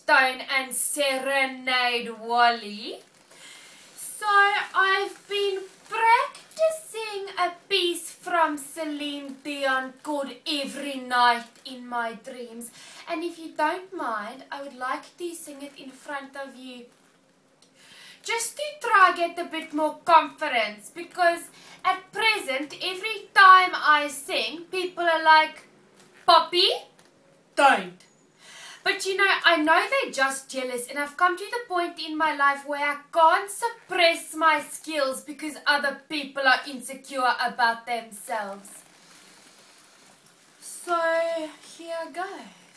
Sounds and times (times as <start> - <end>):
Speech: 0.0 - 3.0, 4.0 - 16.9, 18.2 - 25.6, 26.3 - 26.9, 27.6 - 28.0, 28.8 - 38.8, 40.6 - 42.6.